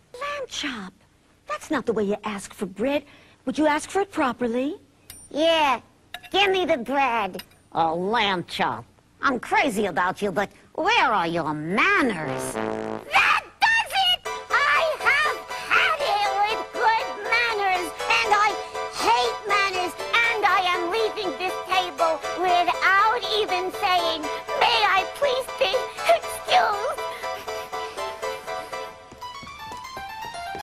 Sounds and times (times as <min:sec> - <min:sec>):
Music: 0:14.2 - 0:30.6.